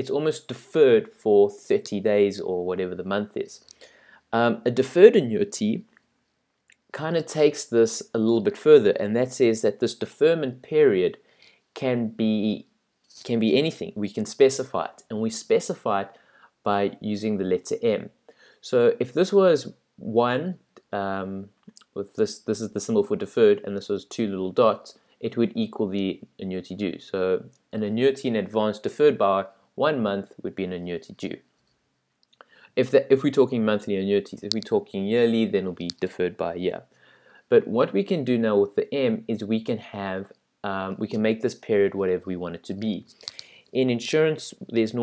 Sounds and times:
Speech: 0.0s - 3.7s, 4.4s - 5.9s, 6.9s - 11.2s, 11.8s - 31.4s, 32.8s - 36.9s, 37.5s - 45.0s.

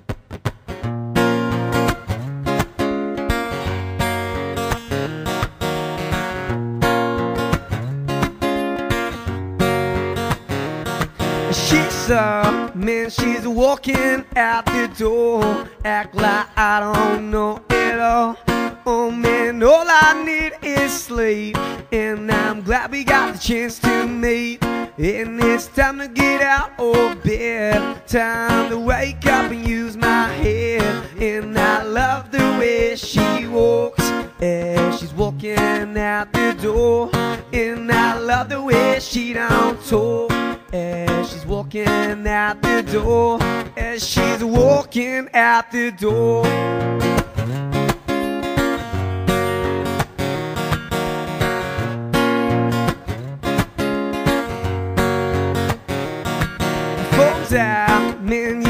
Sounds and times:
Music: 0.0s - 58.7s.

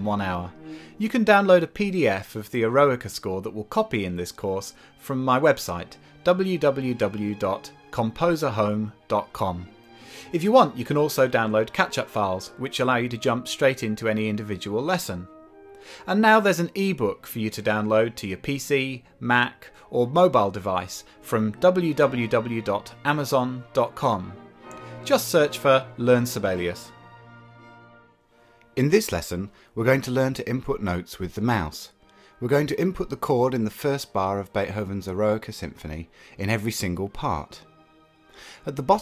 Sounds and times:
Speech: 0.0s - 9.7s, 10.3s - 15.3s, 16.0s - 24.4s, 25.0s - 26.9s, 28.8s - 37.6s, 38.6s - 39.0s
Music: 0.0s - 39.0s.

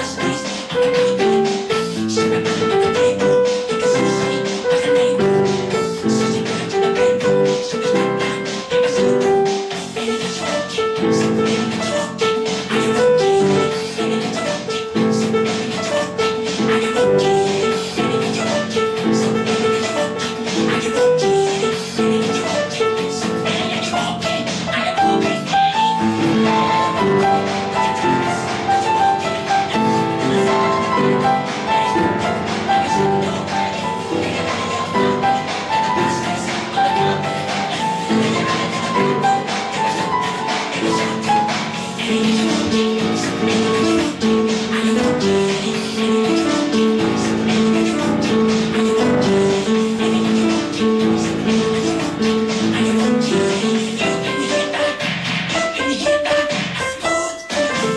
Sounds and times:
Music: 0.0s - 57.9s.

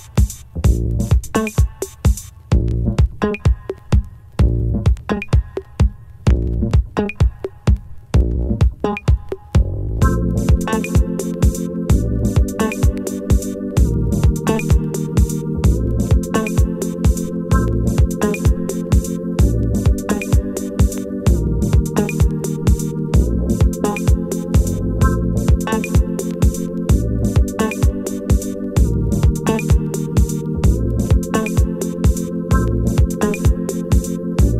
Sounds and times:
Music: 0.0s - 34.5s.

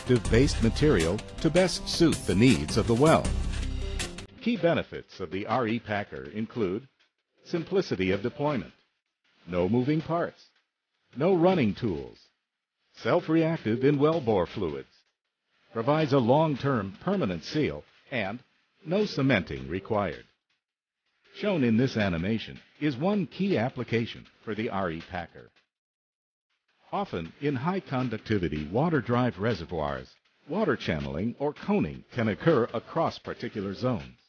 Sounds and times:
Speech: 0.0s - 3.3s, 4.4s - 6.9s, 7.5s - 8.8s, 9.5s - 10.5s, 11.2s - 12.3s, 13.0s - 14.9s, 15.7s - 20.3s, 21.3s - 25.5s, 26.9s - 34.2s
Music: 0.0s - 20.4s, 21.1s - 25.7s, 26.5s - 34.2s.

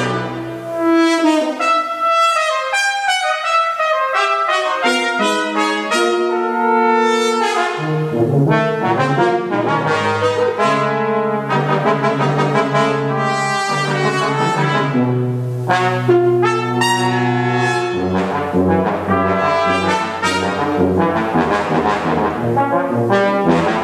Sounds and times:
French horn: 0.0s - 23.8s
Trombone: 0.0s - 23.8s
Trumpet: 0.0s - 23.8s.

